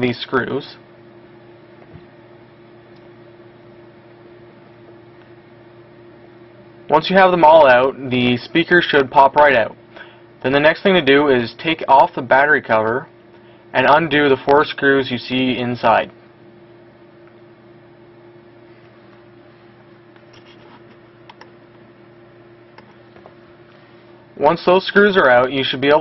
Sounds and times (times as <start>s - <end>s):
Speech: 0.0s - 0.9s, 6.9s - 9.8s, 10.4s - 13.1s, 13.7s - 16.2s, 24.4s - 26.0s.